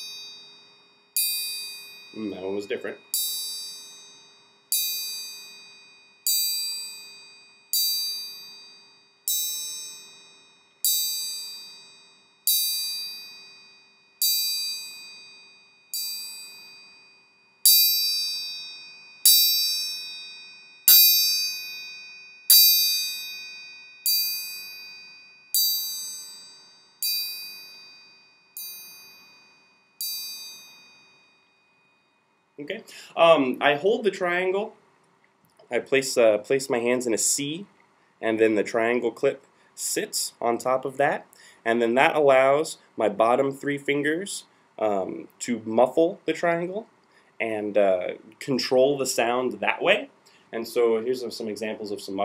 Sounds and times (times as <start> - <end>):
Percussion: 0.0 - 43.4.